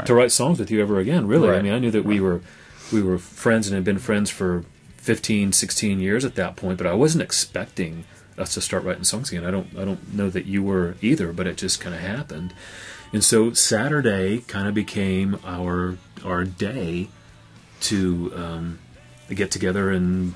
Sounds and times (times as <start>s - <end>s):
Speech: 0.0s - 12.5s, 13.2s - 17.1s, 17.8s - 20.3s
Music: 0.0s - 20.3s.